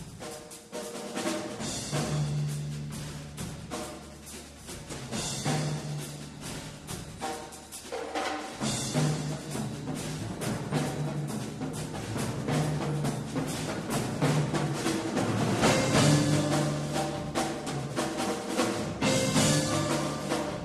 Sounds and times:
Drum: 0.0s - 20.6s
Drum kit: 0.0s - 20.6s.

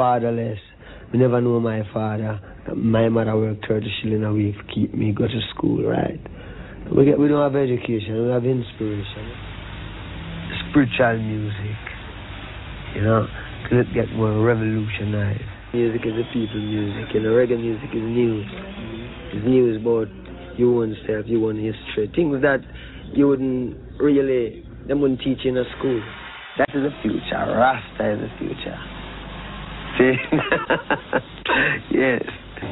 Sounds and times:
Speech: 0.0s - 6.3s, 6.9s - 9.4s, 10.5s - 12.0s, 12.9s - 28.9s, 30.0s - 30.4s, 31.6s - 32.7s.

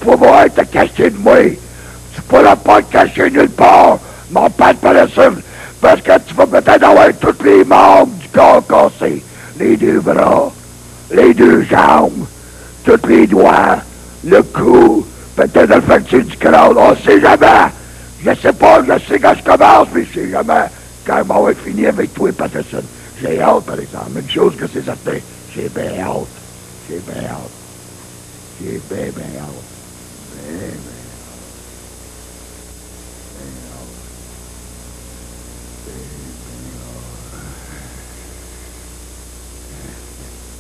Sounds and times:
Speech: 0.0s - 1.6s, 2.2s - 12.3s, 12.9s - 27.6s, 28.6s - 31.5s, 33.3s - 34.1s, 35.9s - 38.1s, 39.7s - 40.3s.

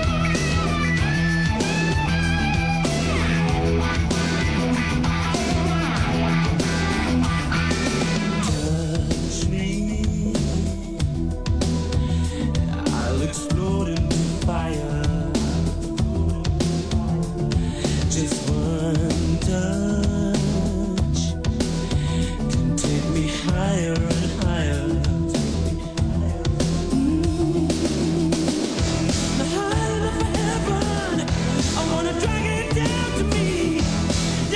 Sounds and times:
Music: 0.0s - 34.5s.

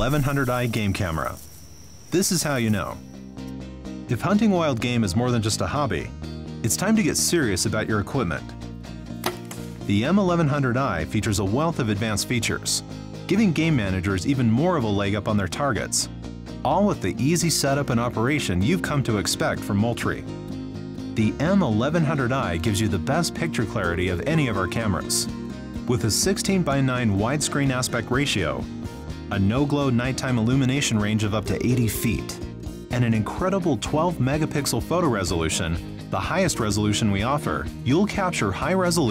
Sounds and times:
Speech: 0.0s - 1.4s, 2.1s - 3.0s, 4.1s - 8.5s, 9.9s - 20.3s, 21.2s - 25.3s, 25.9s - 28.7s, 29.3s - 39.1s
Music: 0.0s - 39.1s.

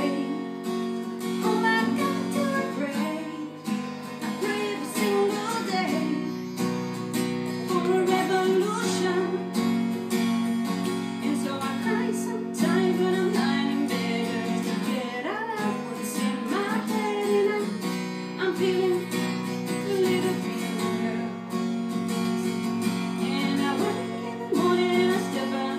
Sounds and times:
Female singing: 0.0s - 0.4s, 1.4s - 3.7s, 4.3s - 6.4s, 7.6s - 9.6s, 11.2s - 21.3s, 23.2s - 25.7s
Guitar: 0.0s - 25.7s.

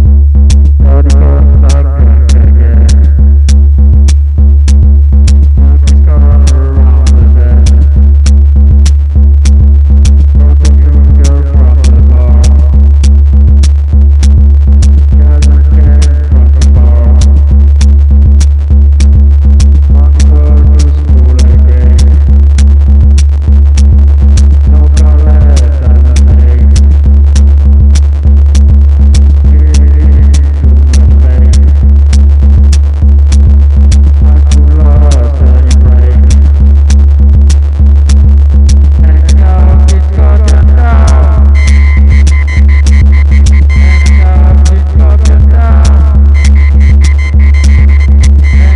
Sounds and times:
Music: 0.0s - 48.7s
Throbbing: 0.0s - 48.7s.

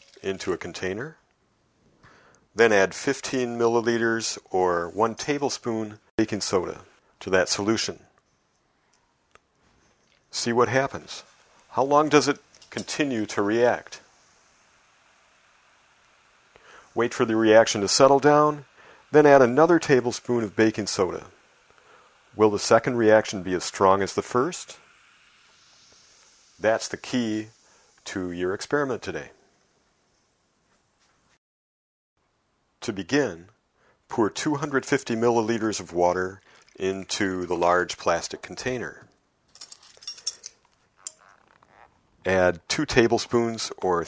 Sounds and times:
Liquid: 0.0s - 0.8s, 35.4s - 38.7s
Speech: 0.2s - 1.2s, 2.6s - 8.1s, 10.3s - 14.0s, 17.0s - 21.3s, 22.4s - 24.8s, 26.6s - 29.4s, 32.8s - 33.5s, 34.1s - 39.1s, 42.3s - 44.0s
Glass: 39.6s - 41.4s.

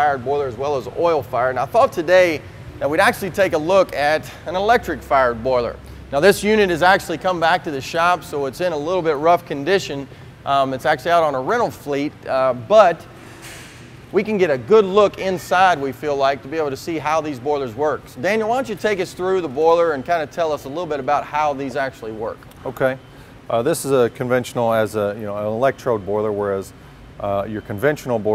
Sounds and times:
Speech: 0.0s - 13.0s, 14.1s - 28.3s.

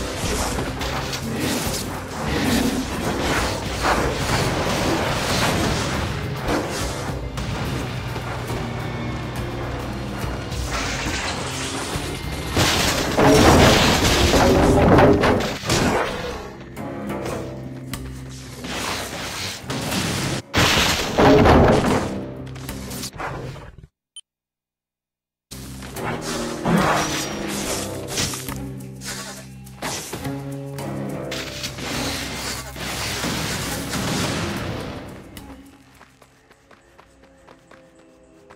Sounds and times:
Music: 0.0s - 23.1s, 25.5s - 38.5s.

